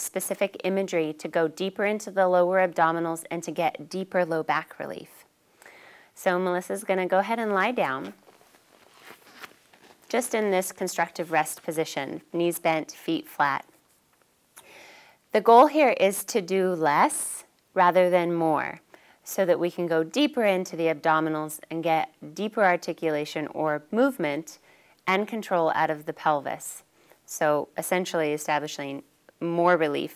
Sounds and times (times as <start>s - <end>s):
Speech: 0.0s - 5.3s, 6.2s - 8.2s, 10.1s - 13.7s, 15.4s - 30.1s.